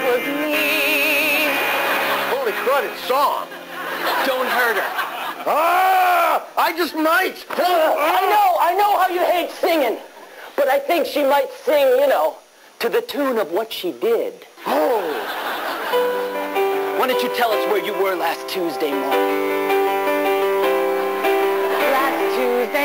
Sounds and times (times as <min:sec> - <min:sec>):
Music: 0:00.0 - 0:04.6, 0:15.7 - 0:22.8.